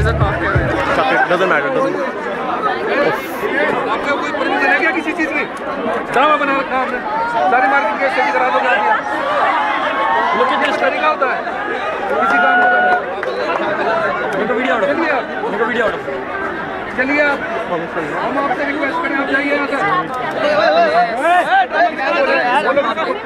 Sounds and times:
Chatter: 0.0 - 23.2
Crowd: 0.0 - 23.2
Speech: 0.0 - 23.2.

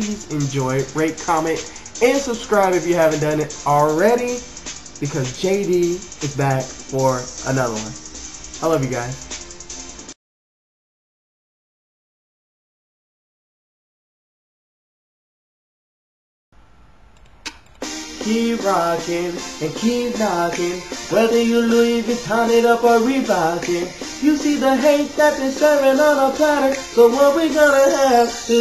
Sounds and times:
Speech: 0.0 - 8.0, 8.6 - 9.2
Music: 0.0 - 10.2, 17.8 - 28.6.

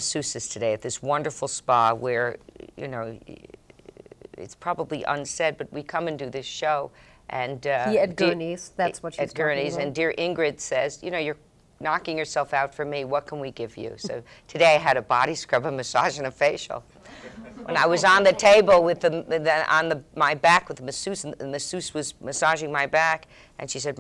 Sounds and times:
Female speech, woman speaking: 4.4 - 16.8, 17.7 - 24.0.

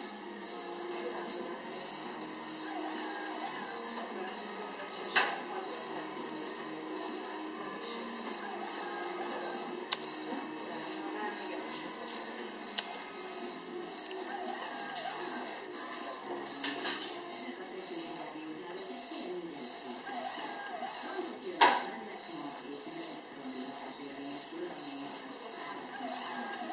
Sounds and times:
Music: 0.0 - 17.7
Printer: 0.0 - 26.7
Speech: 0.0 - 26.7.

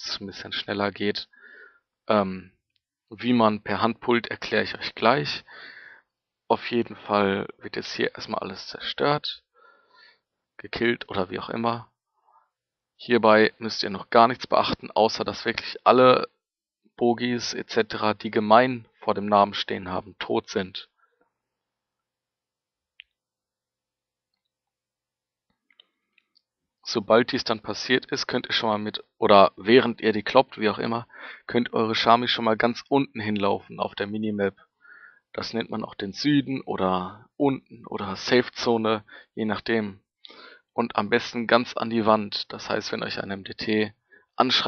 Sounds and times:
Speech: 0.0 - 1.4, 2.1 - 2.5, 3.2 - 5.5, 6.5 - 9.4, 10.6 - 11.9, 13.0 - 16.4, 17.0 - 20.9, 26.9 - 34.6, 35.4 - 40.0, 40.8 - 44.6.

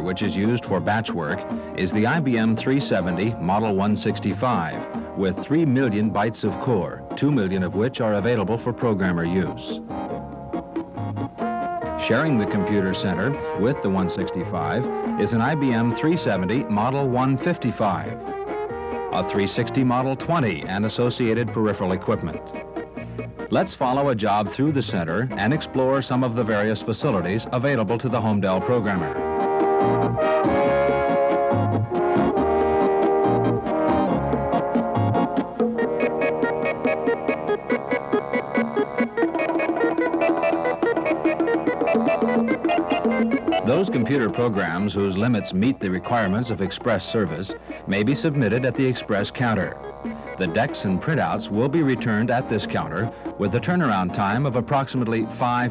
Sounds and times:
Speech: 0.0 - 9.8, 12.0 - 18.2, 19.1 - 22.4, 23.5 - 29.2, 43.6 - 49.8, 50.4 - 55.7
Music: 0.0 - 55.7.

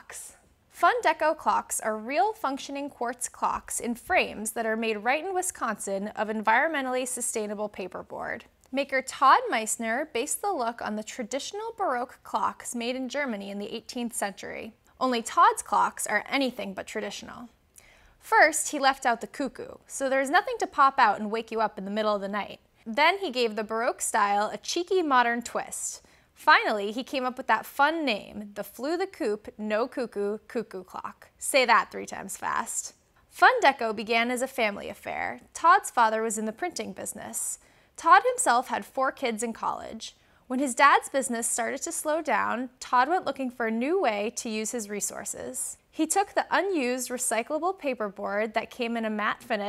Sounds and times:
Speech: 0.0 - 17.6, 18.2 - 49.6.

